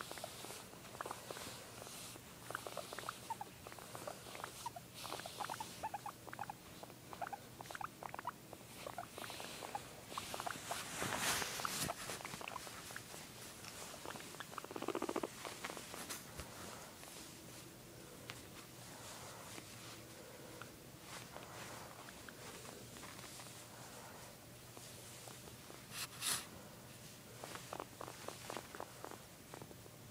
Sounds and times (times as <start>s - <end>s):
Patter: 0.0s - 30.1s.